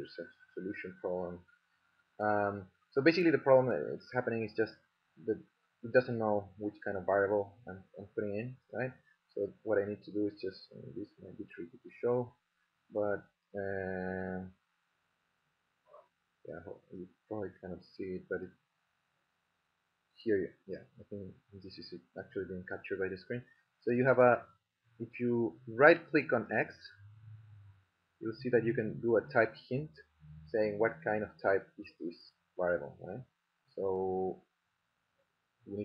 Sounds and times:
Speech: 0.0s - 1.4s, 2.2s - 12.3s, 13.0s - 14.5s, 16.5s - 18.5s, 20.3s - 24.4s, 25.0s - 27.0s, 28.2s - 34.4s
Inside, small room: 0.0s - 35.8s.

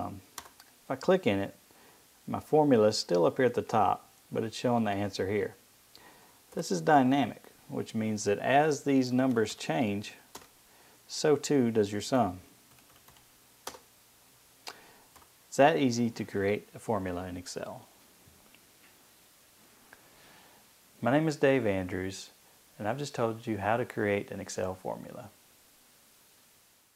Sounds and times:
Computer keyboard: 0.4s - 0.7s, 10.3s - 10.5s, 12.7s - 13.8s, 15.1s - 15.3s.

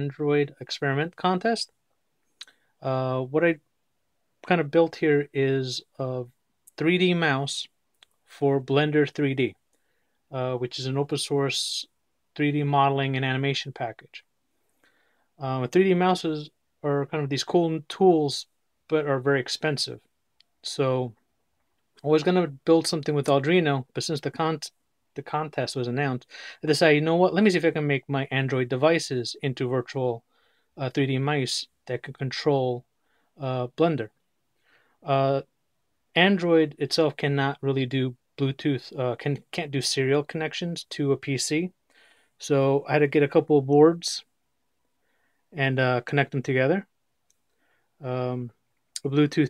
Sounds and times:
Speech: 0.0s - 1.8s, 2.8s - 3.7s, 4.4s - 9.6s, 10.3s - 14.3s, 15.4s - 21.2s, 22.0s - 30.2s, 30.8s - 34.2s, 35.0s - 35.5s, 36.1s - 41.8s, 42.4s - 44.3s, 45.6s - 47.0s, 48.0s - 49.5s.

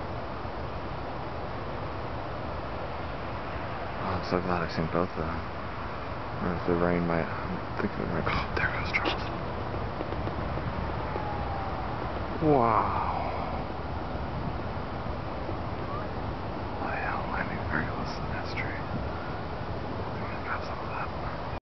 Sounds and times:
Speech: 4.0s - 5.4s, 6.4s - 9.3s, 12.4s - 13.6s, 16.8s - 18.9s.

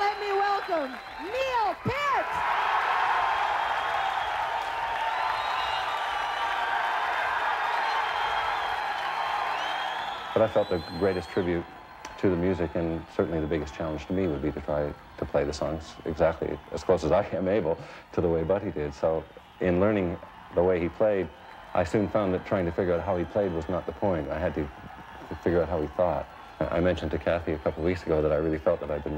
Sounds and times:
Speech: 10.4s - 11.6s, 12.2s - 24.7s, 25.3s - 29.1s.

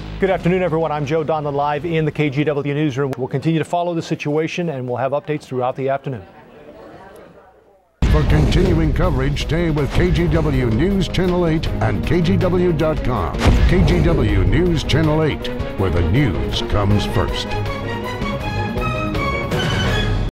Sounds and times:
Music: 0.0s - 2.5s, 8.0s - 20.3s
Speech: 0.2s - 17.5s.

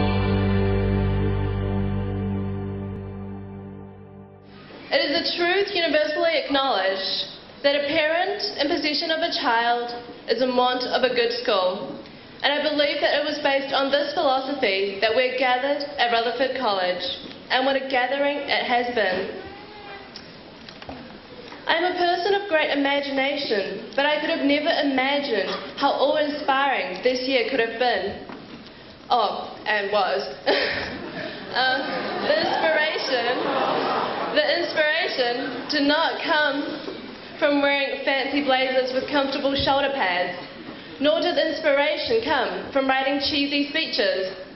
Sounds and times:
Narration, monologue: 4.8s - 44.5s
Female speech, woman speaking: 4.9s - 19.4s, 21.7s - 28.3s, 29.1s - 30.5s, 31.5s - 33.5s, 34.3s - 36.8s, 37.4s - 44.5s.

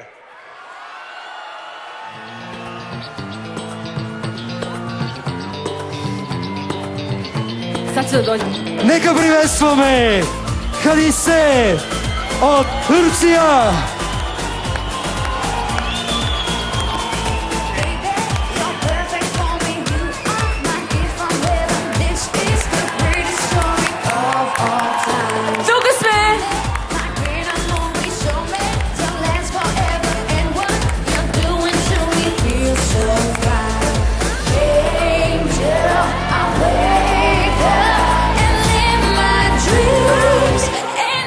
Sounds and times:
Music: 2.0s - 41.2s.

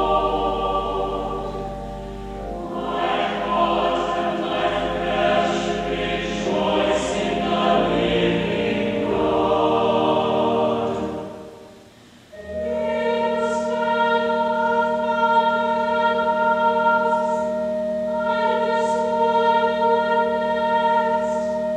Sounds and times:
Mantra: 0.0s - 1.6s, 2.6s - 11.7s, 12.5s - 21.7s.

